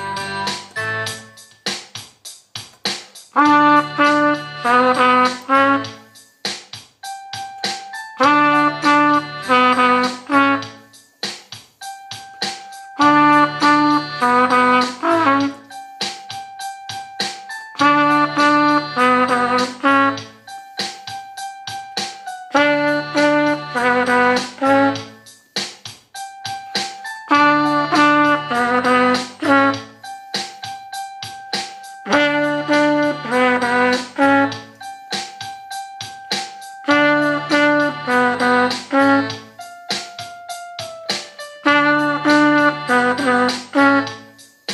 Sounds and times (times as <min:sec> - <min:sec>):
Trumpet: 0:00.0 - 0:01.4, 0:03.3 - 0:06.2, 0:07.9 - 0:11.0, 0:12.7 - 0:16.8, 0:17.6 - 0:21.6, 0:22.2 - 0:25.3, 0:26.7 - 0:31.0, 0:31.7 - 0:35.0, 0:36.6 - 0:40.6, 0:41.4 - 0:44.7.